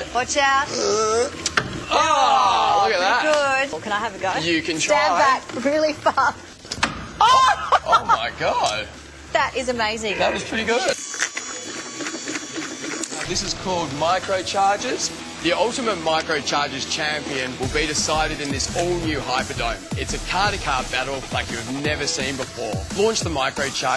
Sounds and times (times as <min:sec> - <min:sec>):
Music: 0:11.0 - 0:23.9.